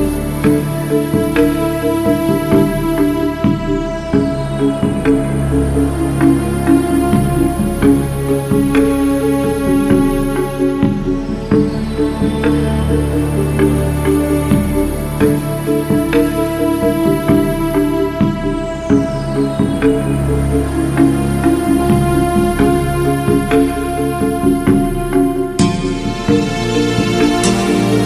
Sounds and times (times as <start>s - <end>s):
Music: 0.0s - 28.0s.